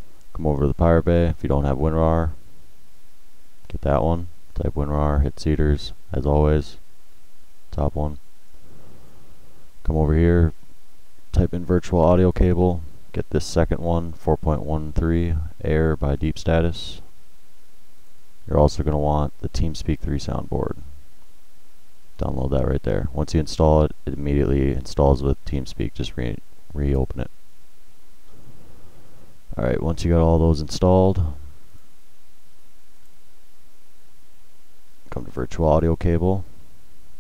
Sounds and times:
Speech: 0:00.3 - 0:02.4, 0:03.7 - 0:06.8, 0:07.7 - 0:08.2, 0:09.8 - 0:10.6, 0:11.3 - 0:17.1, 0:18.5 - 0:20.9, 0:22.2 - 0:27.4, 0:29.5 - 0:31.5, 0:35.1 - 0:36.5.

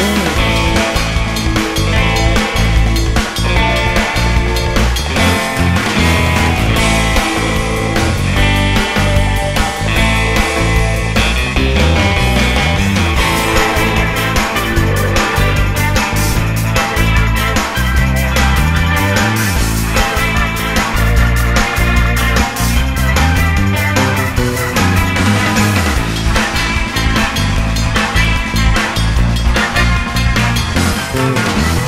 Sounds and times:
Theme music: 0:11.6 - 0:26.5.

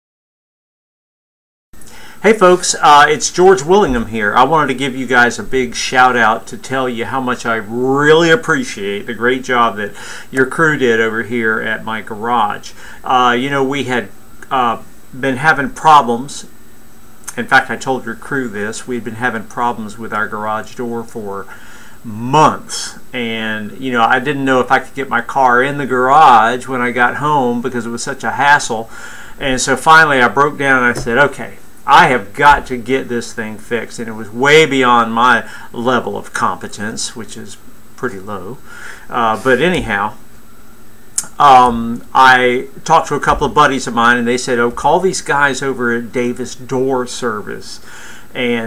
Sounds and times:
Speech: 0:02.2 - 0:16.5, 0:17.3 - 0:40.2, 0:41.2 - 0:48.6.

